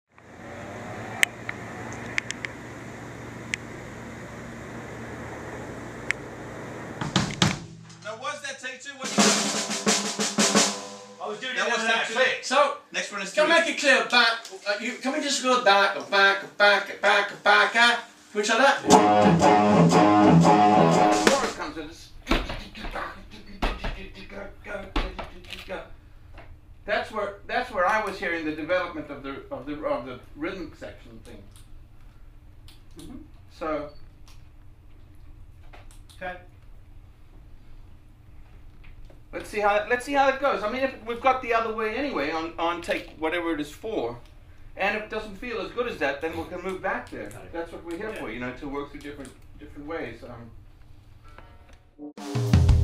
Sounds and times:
Music: 7.0 - 8.1, 9.0 - 11.4, 18.8 - 21.6, 51.4 - 52.8
Speech: 8.0 - 9.2, 11.2 - 18.8, 21.2 - 25.9, 26.9 - 31.5, 33.0 - 33.9, 36.2 - 36.5, 39.3 - 44.2, 44.8 - 50.6.

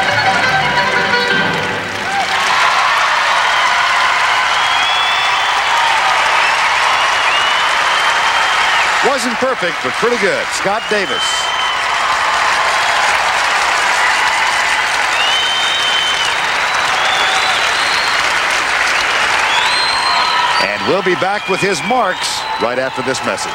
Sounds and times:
Applause: 0.0 - 23.5.

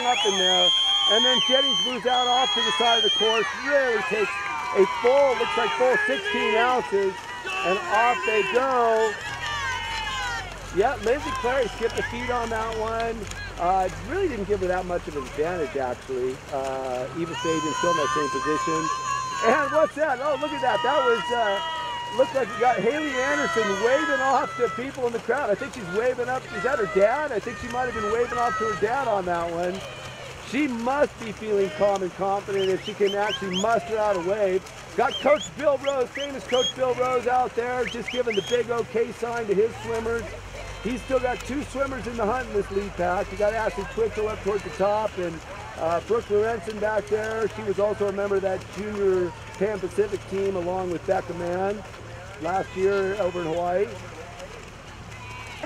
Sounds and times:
Speech: 0.0 - 9.1, 10.8 - 21.6, 30.5 - 51.8
Stream: 0.0 - 55.6.

